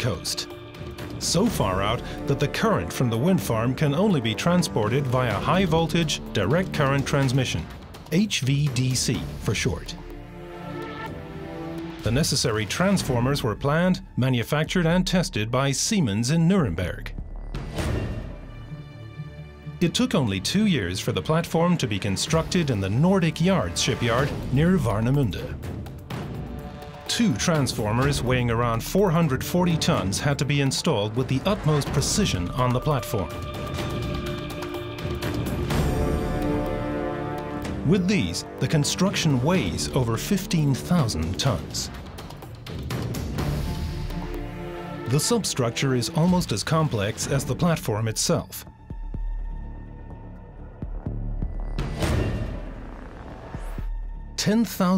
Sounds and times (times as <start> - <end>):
Speech: 0.0 - 0.5, 1.2 - 10.0, 12.0 - 17.2, 19.8 - 25.6, 27.1 - 33.4, 37.8 - 42.0, 45.1 - 48.7, 54.4 - 54.9
Music: 0.0 - 54.9.